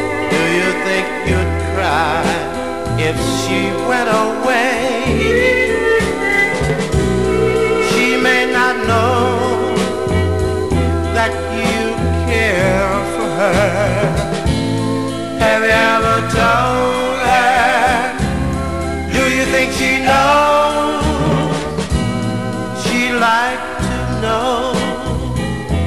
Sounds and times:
Country: 0.0 - 25.8.

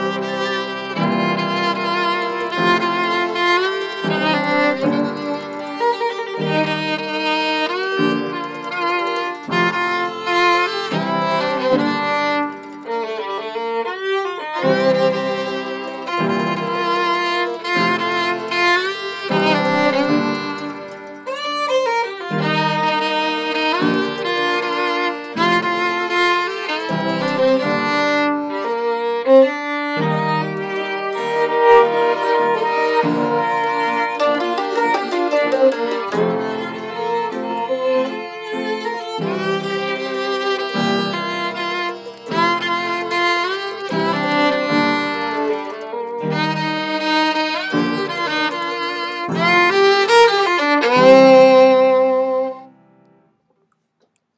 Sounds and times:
Violin, fiddle: 0.0 - 53.2.

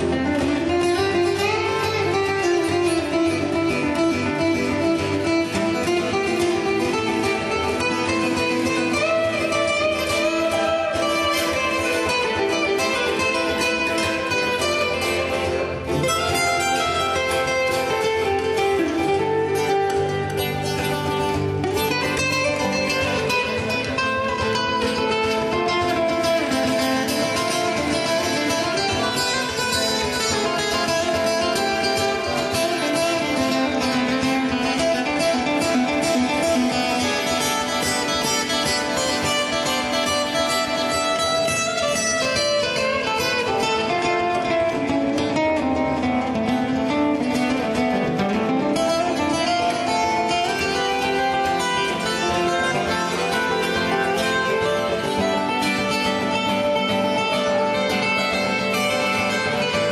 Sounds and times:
Acoustic guitar: 0.0 - 59.9
Steel guitar, slide guitar: 0.0 - 59.9.

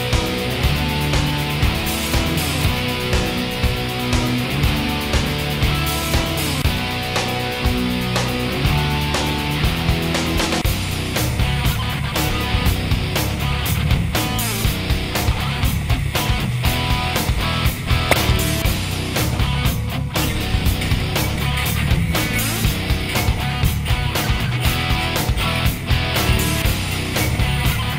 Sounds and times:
Music: 0.0 - 27.9.

